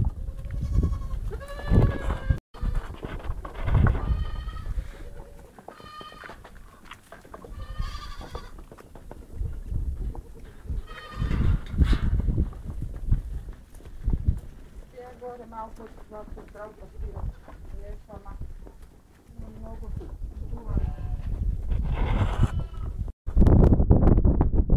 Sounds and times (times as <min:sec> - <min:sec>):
Sheep: 0:00.0 - 0:23.0
Speech: 0:14.9 - 0:18.4, 0:19.3 - 0:21.2.